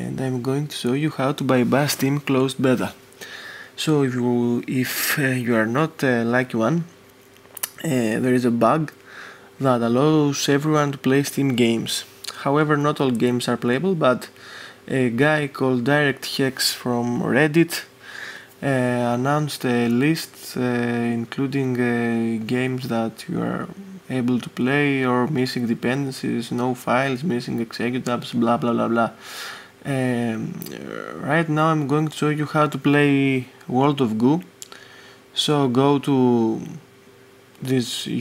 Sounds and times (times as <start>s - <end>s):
Speech: 0.0s - 3.0s, 3.8s - 7.0s, 7.6s - 9.0s, 9.6s - 18.0s, 18.6s - 29.2s, 29.8s - 34.7s, 35.4s - 36.9s, 37.6s - 38.2s.